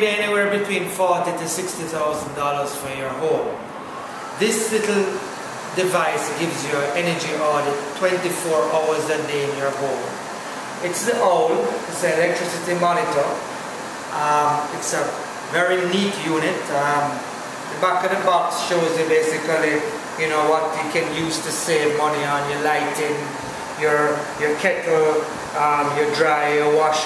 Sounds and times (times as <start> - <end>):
Speech: 0.0 - 3.7, 4.4 - 10.2, 10.8 - 13.5, 14.1 - 27.0.